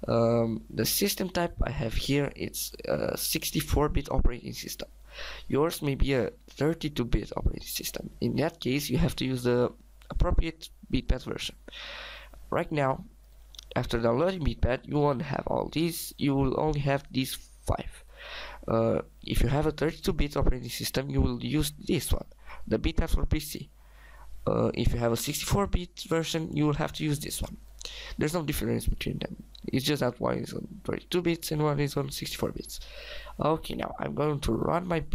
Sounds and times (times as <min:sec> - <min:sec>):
Speech: 0:00.0 - 0:04.9, 0:05.5 - 0:11.6, 0:12.5 - 0:18.0, 0:18.6 - 0:23.7, 0:24.4 - 0:27.6, 0:28.2 - 0:32.8, 0:33.4 - 0:35.1.